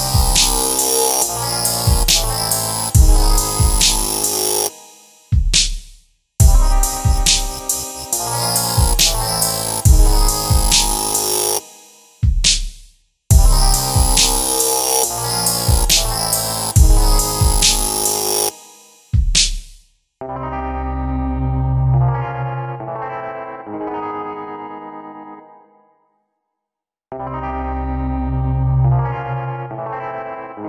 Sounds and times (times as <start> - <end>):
Dubstep: 0.0 - 5.8, 6.4 - 19.7.